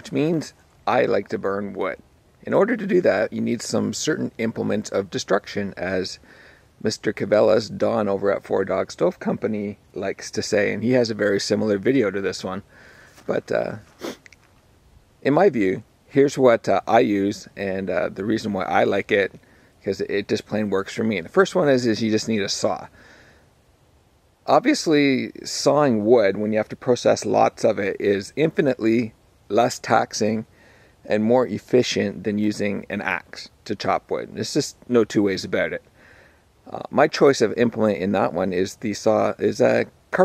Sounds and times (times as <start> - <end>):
Speech: 0.0 - 6.2, 6.8 - 13.9, 15.2 - 22.9, 24.5 - 35.9, 36.7 - 40.2.